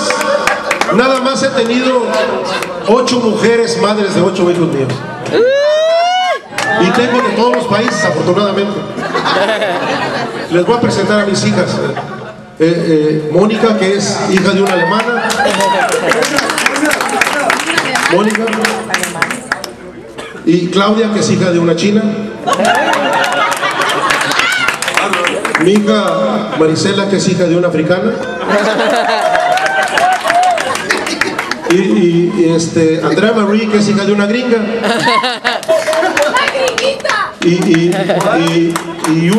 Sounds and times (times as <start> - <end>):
Laughter: 9.0 - 10.6, 11.9 - 12.4, 15.3 - 16.6, 22.4 - 24.6, 28.3 - 31.7, 34.8 - 36.6, 37.6 - 38.6.